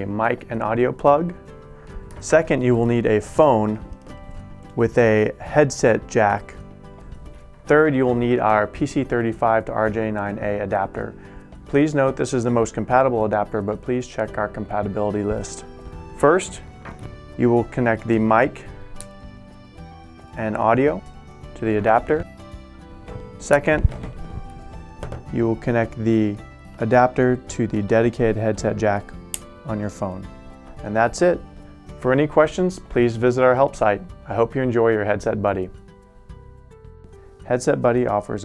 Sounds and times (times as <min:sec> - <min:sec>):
Speech: 0:00.0 - 0:01.4, 0:02.2 - 0:03.8, 0:04.8 - 0:06.6, 0:07.7 - 0:15.6, 0:16.2 - 0:16.6, 0:17.4 - 0:18.7, 0:20.4 - 0:21.0, 0:21.6 - 0:22.3, 0:23.4 - 0:23.9, 0:25.3 - 0:29.1, 0:29.7 - 0:31.4, 0:32.0 - 0:35.8, 0:37.5 - 0:38.4
Music: 0:00.0 - 0:38.4.